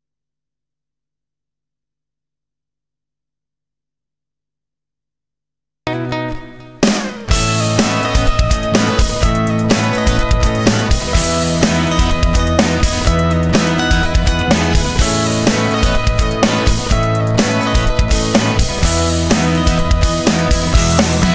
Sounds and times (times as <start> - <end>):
Sampler: 6.8 - 21.3.